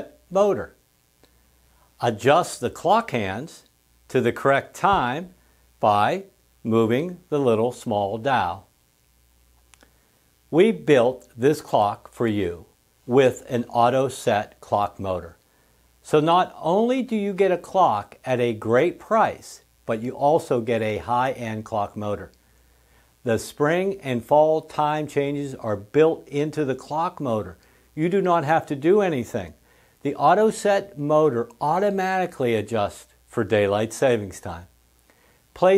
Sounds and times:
Speech: 0.0s - 0.8s, 2.0s - 8.7s, 10.5s - 15.4s, 16.0s - 22.4s, 23.2s - 34.7s, 35.6s - 35.7s.

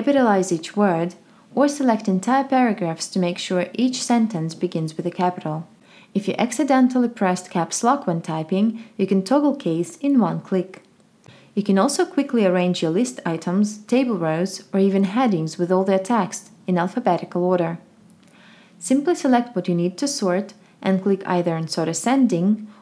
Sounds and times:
Speech: 0.0s - 10.9s, 11.6s - 17.8s, 18.8s - 22.7s.

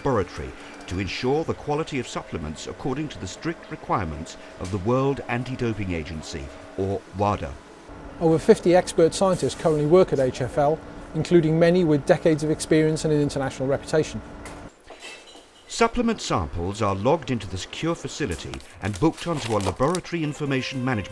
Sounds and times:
Speech: 0.0s - 7.6s, 8.2s - 14.2s, 15.7s - 21.1s.

